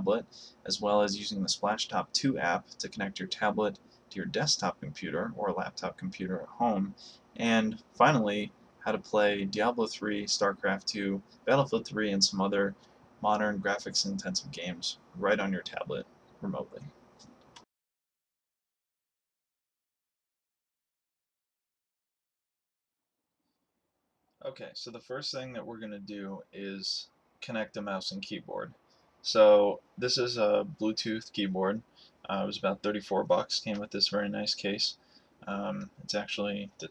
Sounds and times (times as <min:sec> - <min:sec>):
Speech: 0:00.0 - 0:16.9, 0:24.4 - 0:36.9.